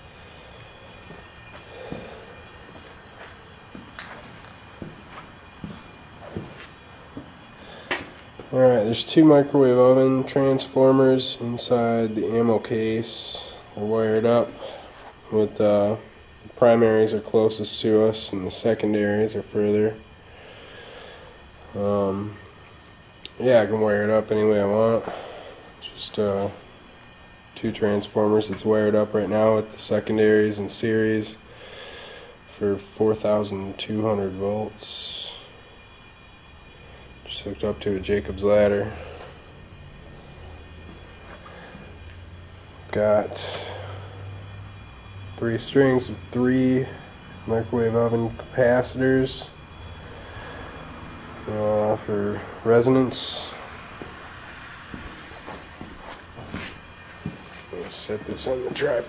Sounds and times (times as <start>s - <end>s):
Speech: 8.5s - 14.6s, 15.3s - 20.0s, 21.7s - 22.4s, 23.3s - 25.1s, 25.8s - 26.6s, 27.6s - 31.4s, 32.6s - 35.4s, 37.3s - 39.0s, 42.9s - 43.8s, 45.4s - 49.5s, 51.5s - 53.6s, 57.7s - 59.0s.